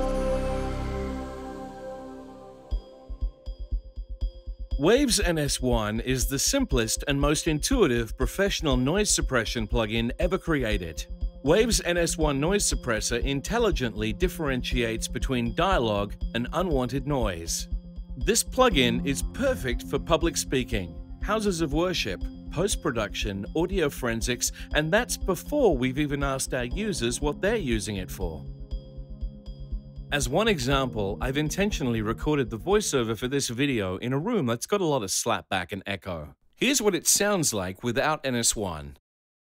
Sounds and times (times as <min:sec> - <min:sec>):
Music: 0:00.0 - 0:34.7
Speech: 0:04.8 - 0:28.4, 0:30.1 - 0:39.0.